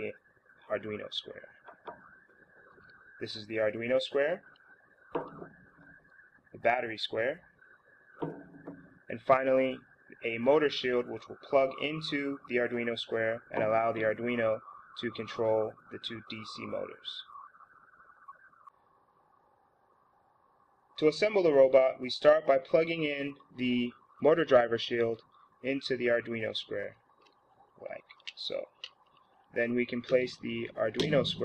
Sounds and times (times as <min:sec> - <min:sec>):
Speech: 0:00.0 - 0:01.5, 0:03.2 - 0:04.5, 0:06.6 - 0:07.4, 0:09.1 - 0:17.3, 0:21.0 - 0:27.0, 0:27.8 - 0:28.8, 0:29.6 - 0:31.4.